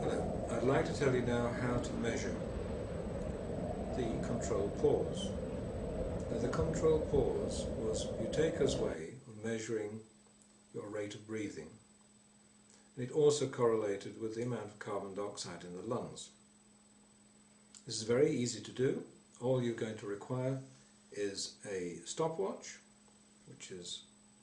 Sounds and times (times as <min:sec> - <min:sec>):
Speech: 0:00.0 - 0:02.5, 0:03.9 - 0:05.4, 0:06.3 - 0:10.1, 0:10.8 - 0:11.8, 0:13.0 - 0:16.4, 0:17.8 - 0:22.9, 0:23.5 - 0:24.1.